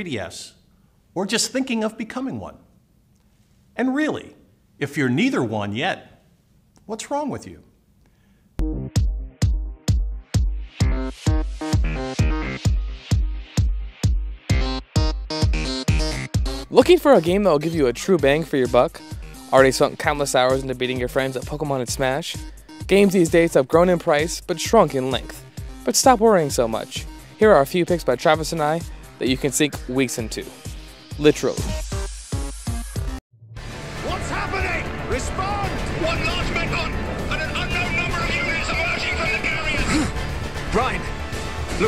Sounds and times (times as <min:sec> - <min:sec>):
Speech: 0:00.0 - 0:00.6, 0:01.2 - 0:02.6, 0:03.8 - 0:06.2, 0:06.9 - 0:07.7, 0:16.7 - 0:30.6, 0:31.2 - 0:31.7, 0:34.0 - 0:40.1, 0:40.7 - 0:41.0
Music: 0:08.6 - 0:41.8.